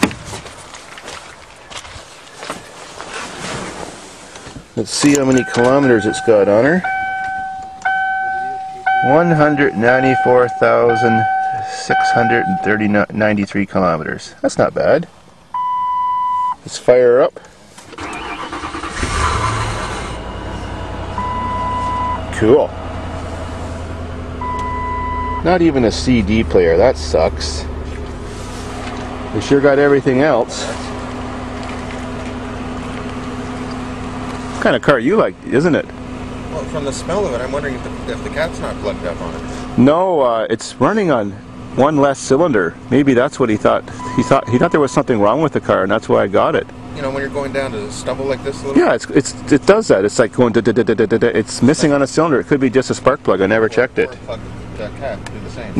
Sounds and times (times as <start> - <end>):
Car: 0.0 - 55.7
Speech: 4.8 - 6.8, 9.0 - 15.1, 16.6 - 17.4, 22.3 - 22.7, 25.4 - 27.7, 29.4 - 30.9, 34.6 - 35.9, 36.5 - 55.7.